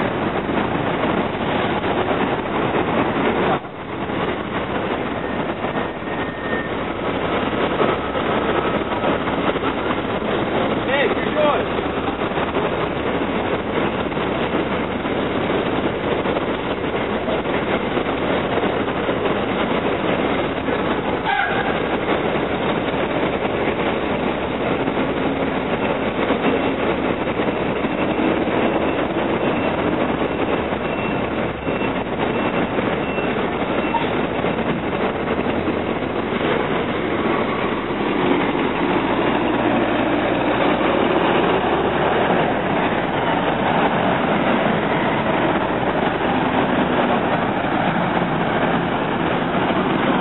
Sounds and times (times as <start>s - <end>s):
Bus: 0.0s - 50.2s.